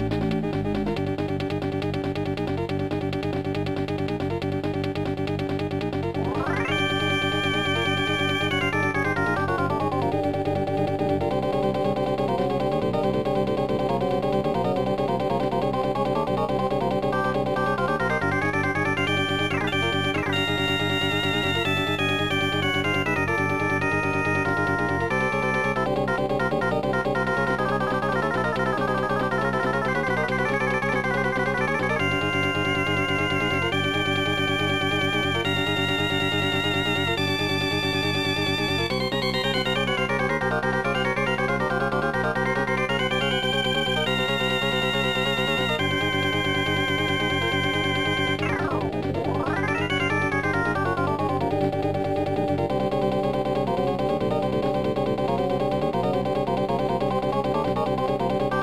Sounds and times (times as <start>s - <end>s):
Music: 0.0s - 58.6s.